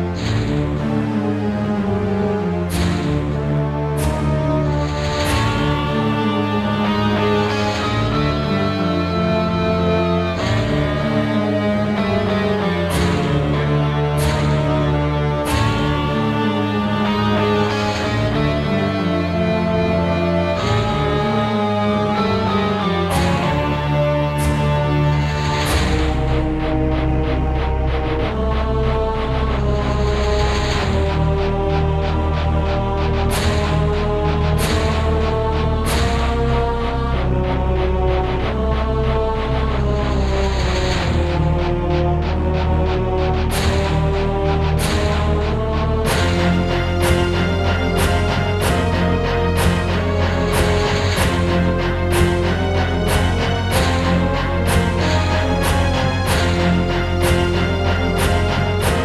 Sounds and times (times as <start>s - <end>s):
Music: 0.0s - 59.0s.